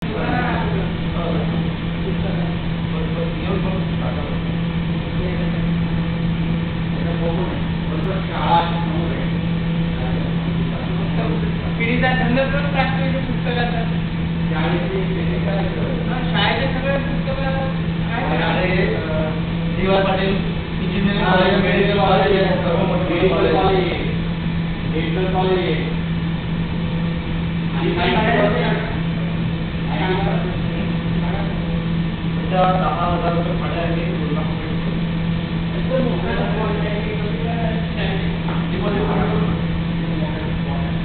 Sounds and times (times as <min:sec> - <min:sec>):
Speech: 0:00.0 - 0:06.0, 0:06.9 - 0:24.2, 0:24.9 - 0:26.0, 0:27.7 - 0:35.0, 0:35.7 - 0:41.0.